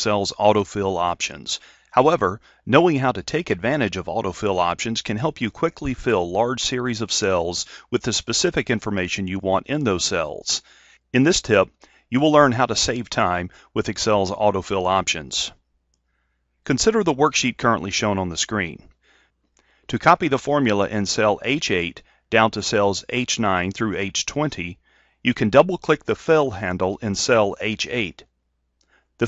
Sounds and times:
Speech: 0.0 - 15.6, 16.7 - 18.9, 19.9 - 28.3.

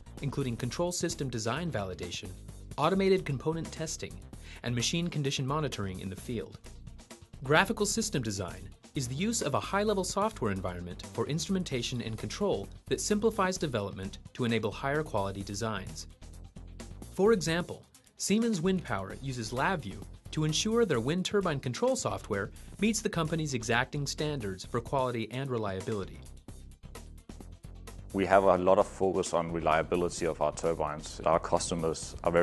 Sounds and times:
Speech: 0.2 - 6.6, 7.4 - 16.0, 17.2 - 26.2, 28.2 - 32.4.

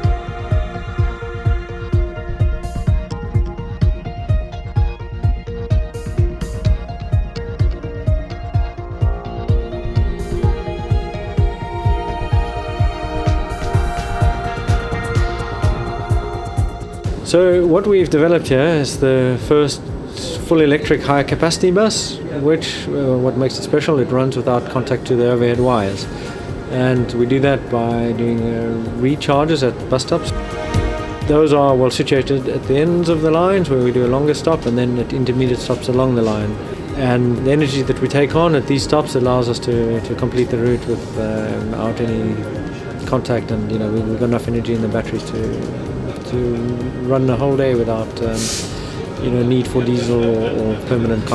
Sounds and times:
Music: 0.0 - 51.3
Speech: 17.3 - 26.1, 26.7 - 30.3, 31.3 - 45.6, 46.2 - 48.5, 49.2 - 51.3.

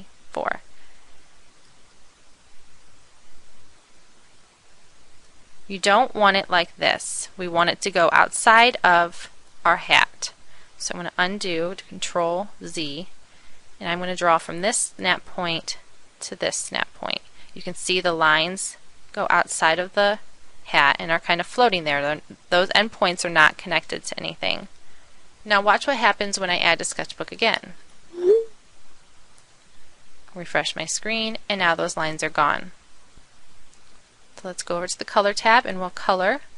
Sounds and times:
Speech: 0.0 - 0.6, 5.7 - 13.1, 13.8 - 24.7, 25.5 - 28.5, 30.3 - 32.8, 34.4 - 36.5.

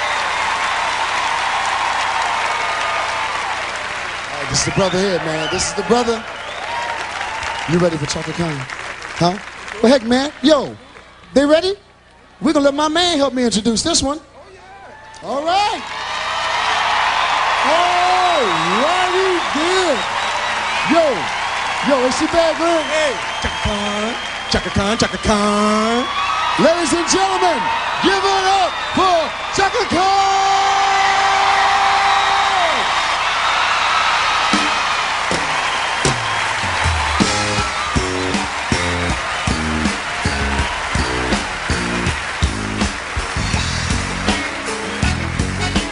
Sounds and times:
Speech: 21.9 - 30.6
Music: 34.5 - 45.9.

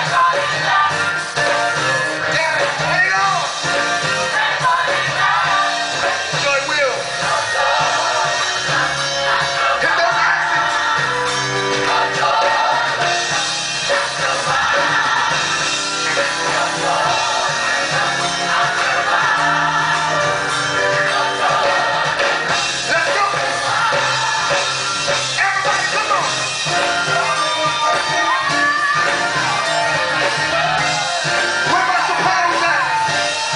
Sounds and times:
Gospel music: 0.0 - 33.5.

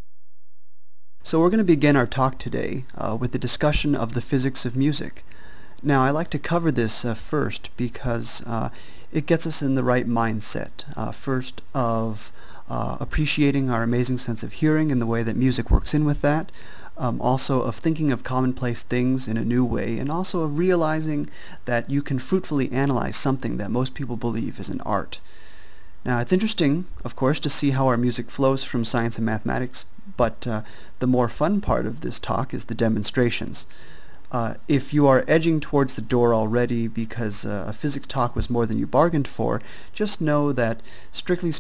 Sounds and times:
Speech: 1.2 - 5.2, 5.8 - 25.2, 26.0 - 33.7, 34.3 - 41.6.

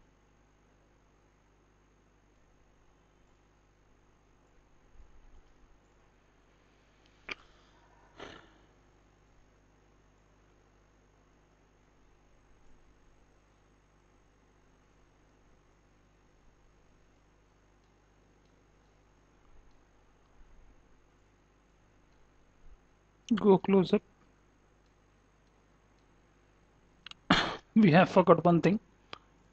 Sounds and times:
Silence: 0.1 - 23.3.

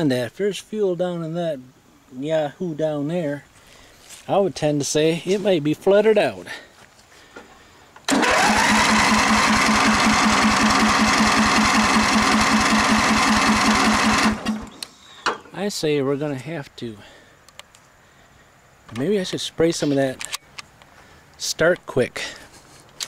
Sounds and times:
Speech: 0.0 - 3.5, 4.2 - 6.7, 15.5 - 17.2, 18.9 - 20.3, 21.4 - 22.4
Lawn mower: 8.1 - 14.8
Vehicle: 8.1 - 15.4.

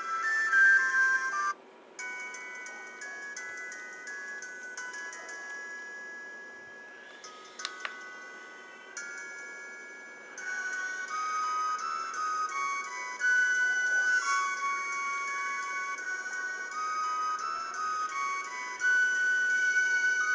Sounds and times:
Inside, small room: 0.0 - 20.3
Chime: 2.0 - 20.3.

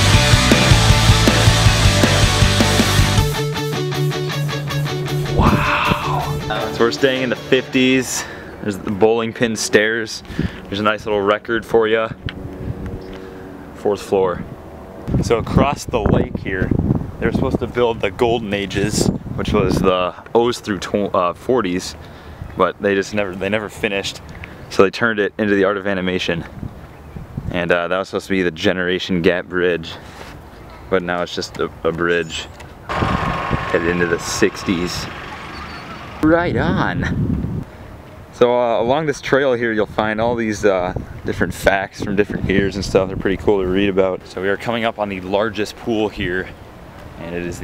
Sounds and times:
Speech: 5.4 - 12.2, 13.8 - 14.5, 15.1 - 22.0, 22.6 - 26.5, 27.5 - 30.0, 30.9 - 32.5, 33.7 - 35.2, 36.2 - 37.1, 38.4 - 46.6, 47.2 - 47.6.

